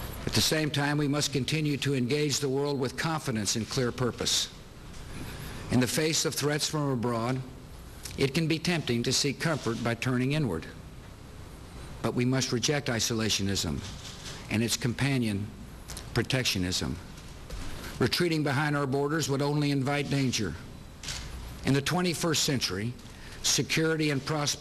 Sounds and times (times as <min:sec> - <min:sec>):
Narration, monologue: 0:00.0 - 0:24.6
Male speech, man speaking: 0:00.3 - 0:04.5, 0:05.7 - 0:07.5, 0:08.2 - 0:10.8, 0:12.0 - 0:13.9, 0:14.5 - 0:15.6, 0:16.2 - 0:17.0, 0:18.0 - 0:20.6, 0:21.6 - 0:24.6.